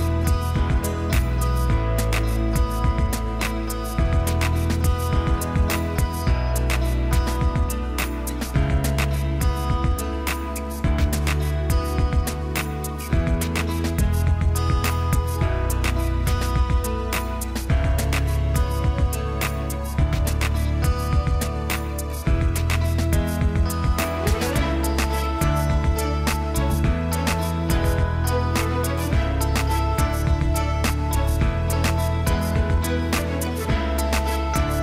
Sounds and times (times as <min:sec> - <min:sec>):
Music: 0:00.0 - 0:34.8.